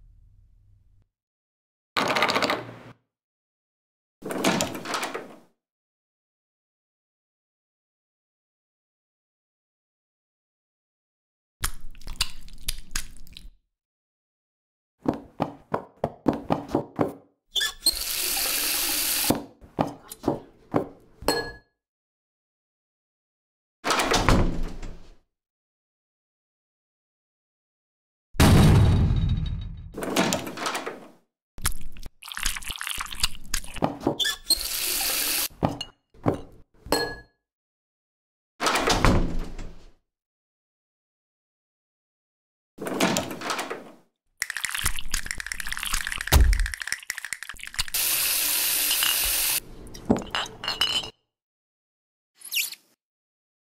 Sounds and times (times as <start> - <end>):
Door: 4.2 - 5.4, 23.9 - 25.0, 38.6 - 39.8, 42.8 - 44.0.